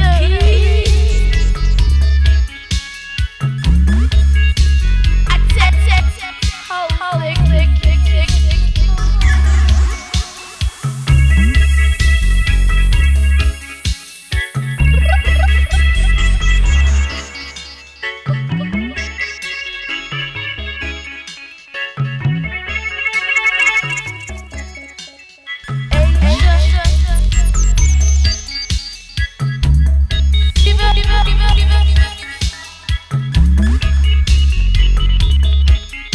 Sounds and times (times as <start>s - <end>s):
Drum machine: 0.0s - 16.8s, 25.9s - 36.1s.